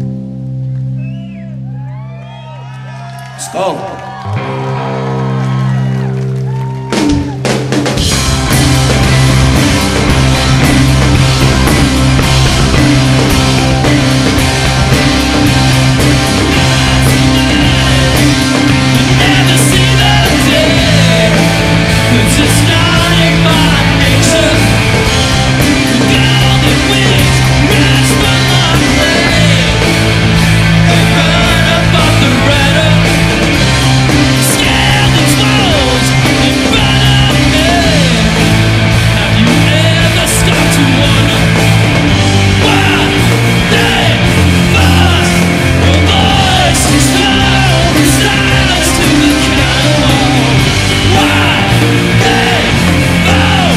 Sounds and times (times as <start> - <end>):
Music: 0.0 - 53.7
Speech: 3.4 - 4.0.